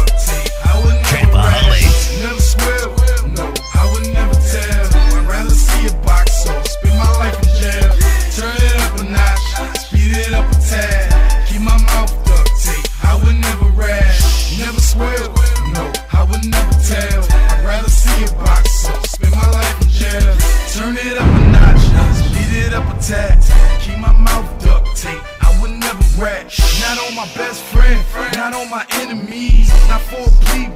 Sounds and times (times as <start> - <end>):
Music: 0.0 - 30.7.